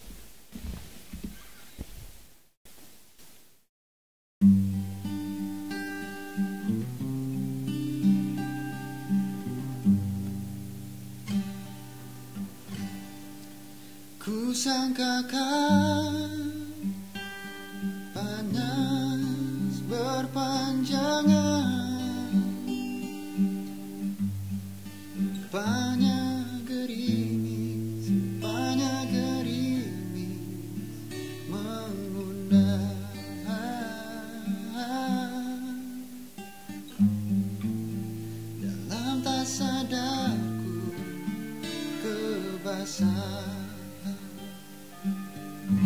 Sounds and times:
Music: 4.4 - 45.8.

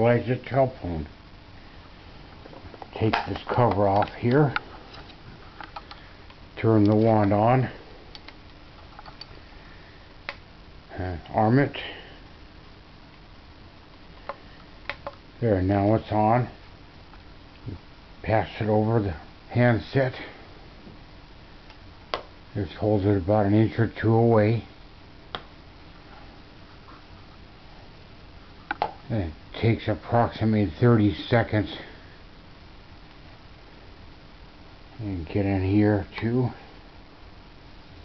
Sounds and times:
Speech: 0.0 - 1.1, 2.9 - 4.6, 6.6 - 7.8, 10.9 - 12.2, 15.4 - 16.6, 17.6 - 20.4, 22.6 - 24.7, 29.1 - 32.0, 35.0 - 36.7.

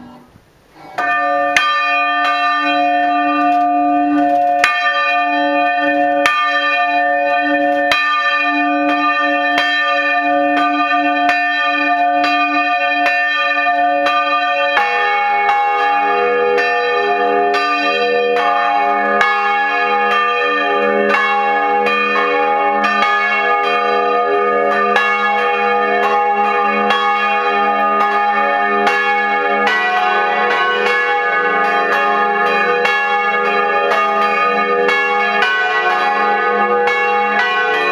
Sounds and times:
Bell: 0.9 - 37.9.

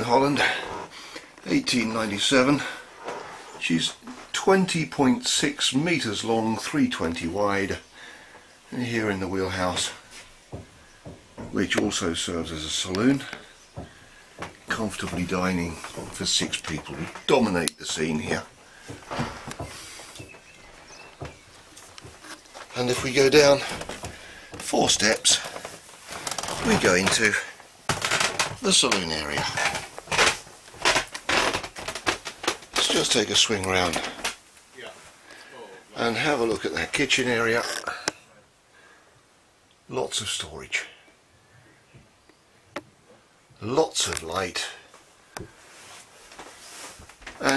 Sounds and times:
Speech: 0.0 - 0.8, 1.4 - 2.8, 3.6 - 7.8, 8.7 - 10.1, 11.5 - 13.5, 14.7 - 18.5, 22.7 - 23.8, 24.6 - 25.6, 26.5 - 27.6, 28.6 - 29.8, 32.8 - 34.2, 34.8 - 38.5, 39.9 - 41.1, 43.6 - 44.9.

